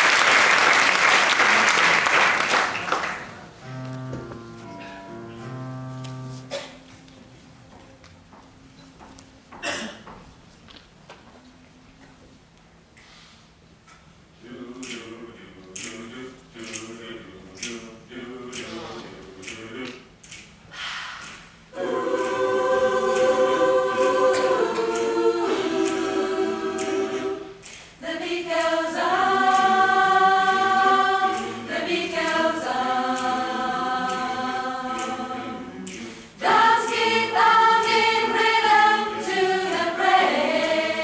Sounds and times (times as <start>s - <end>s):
Choir: 14.4s - 20.1s, 21.7s - 41.0s.